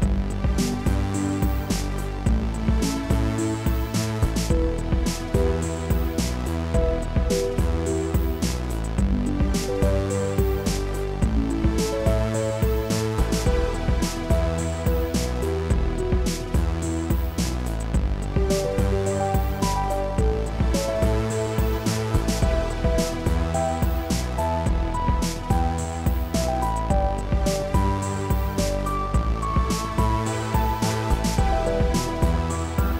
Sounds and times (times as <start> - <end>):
Music: 0.0 - 32.9.